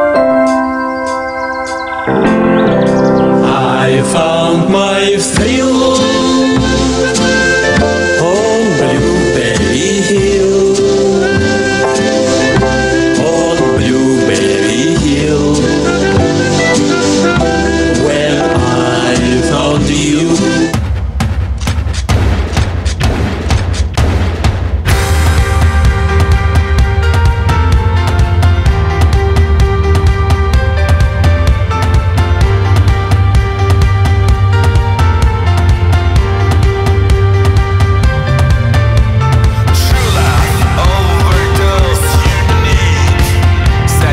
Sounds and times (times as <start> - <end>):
Music: 0.0 - 44.1.